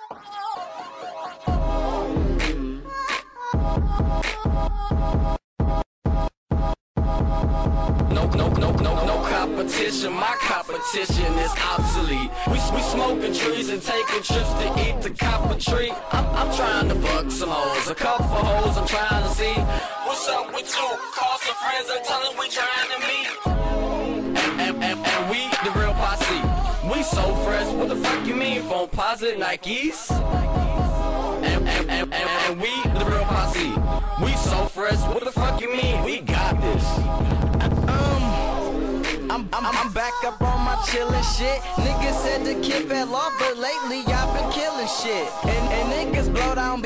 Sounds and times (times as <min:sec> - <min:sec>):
Music: 0:00.0 - 0:29.0, 0:30.1 - 0:46.8.